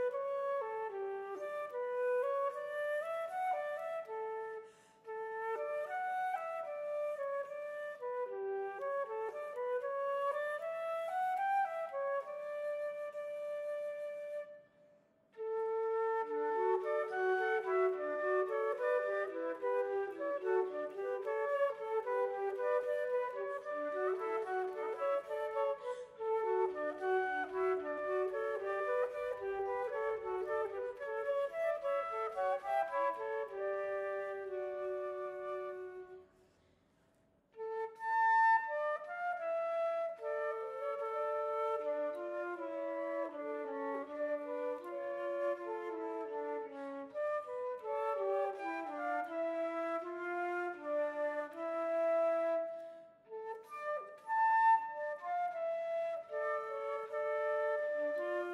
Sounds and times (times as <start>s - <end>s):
Music: 0.0s - 58.5s.